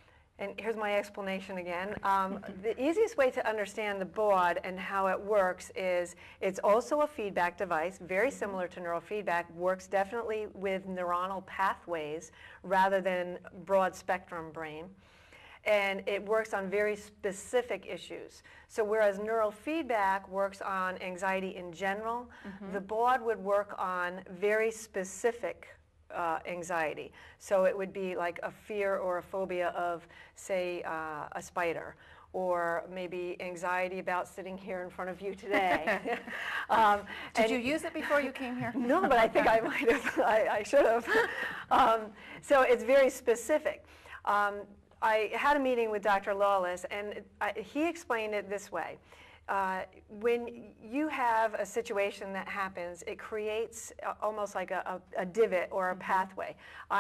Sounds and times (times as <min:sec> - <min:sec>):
Inside, small room: 0:00.0 - 0:57.0
Speech: 0:00.4 - 0:14.9, 0:15.7 - 0:57.0.